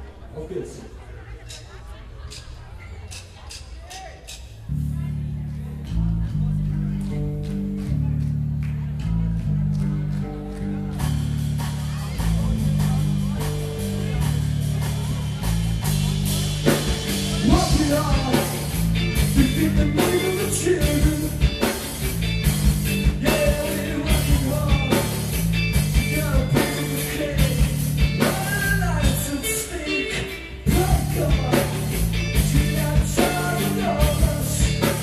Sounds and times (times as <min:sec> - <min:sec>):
Punk rock: 0:10.6 - 0:35.0
Singing: 0:16.6 - 0:21.8, 0:23.0 - 0:35.0.